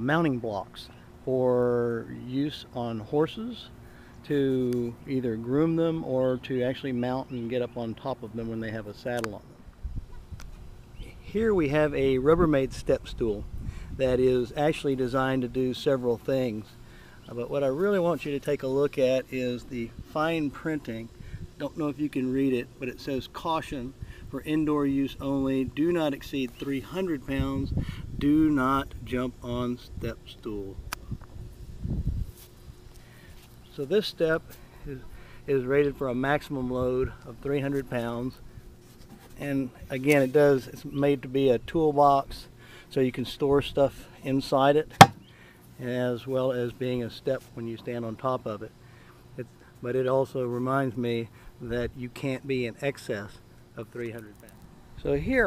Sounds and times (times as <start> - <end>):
Speech: 0.0 - 9.5, 11.1 - 16.7, 17.3 - 30.8, 33.7 - 38.4, 39.4 - 45.0, 45.8 - 48.7, 49.4 - 55.4.